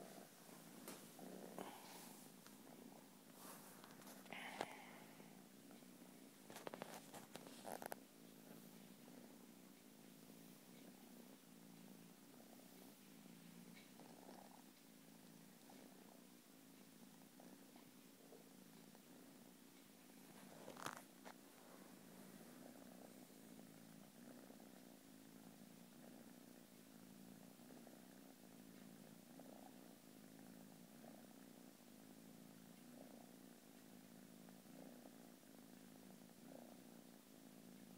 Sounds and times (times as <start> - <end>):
Purr: 0.0 - 37.9.